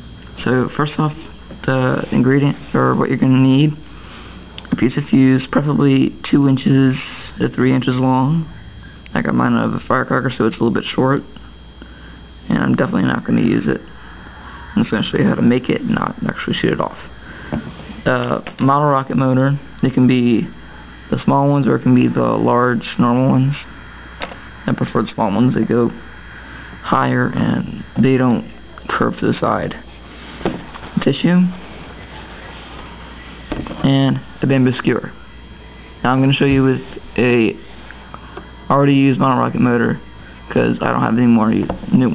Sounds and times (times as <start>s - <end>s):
Speech: 0.4s - 3.8s, 4.6s - 11.4s, 12.4s - 13.9s, 14.8s - 17.1s, 18.0s - 23.8s, 24.7s - 26.0s, 26.8s - 29.9s, 31.0s - 32.7s, 33.8s - 35.2s, 35.9s - 37.7s, 38.7s - 42.1s.